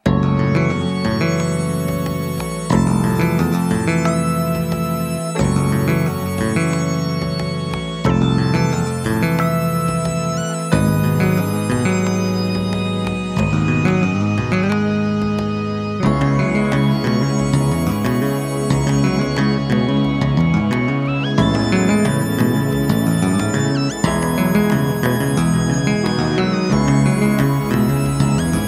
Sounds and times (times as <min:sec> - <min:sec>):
Video game music: 0:00.0 - 0:28.6.